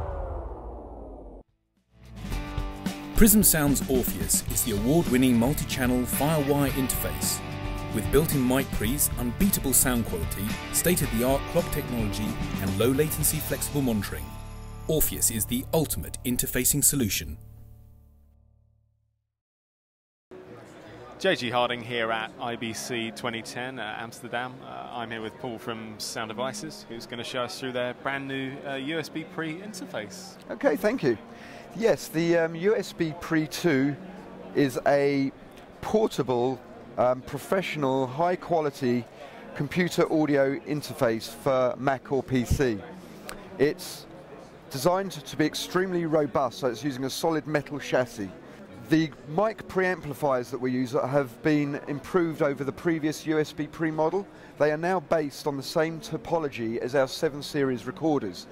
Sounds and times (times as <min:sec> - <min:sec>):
Music: 0:01.8 - 0:18.8, 0:23.2 - 0:35.3
Speech: 0:03.2 - 0:14.3, 0:14.9 - 0:17.4, 0:20.5 - 0:31.2, 0:31.8 - 0:44.1, 0:44.7 - 0:58.5.